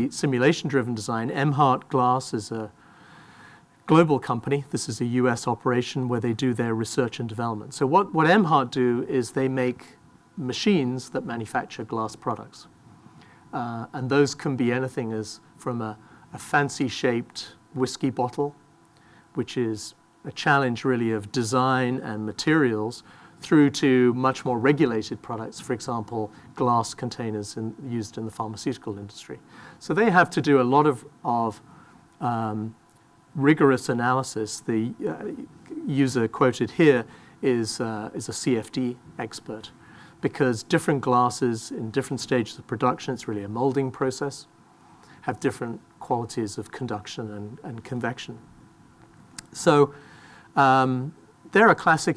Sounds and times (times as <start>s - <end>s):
Speech: 0.0s - 2.8s, 3.9s - 12.7s, 13.5s - 18.6s, 19.4s - 31.6s, 32.2s - 32.8s, 33.4s - 44.5s, 45.2s - 48.4s, 49.4s - 50.0s, 50.6s - 52.1s.